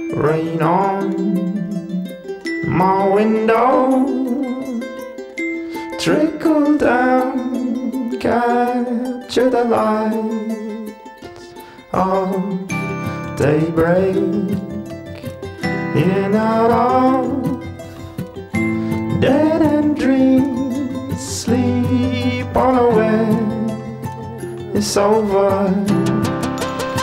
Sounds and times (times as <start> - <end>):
Music: 0.0 - 27.0.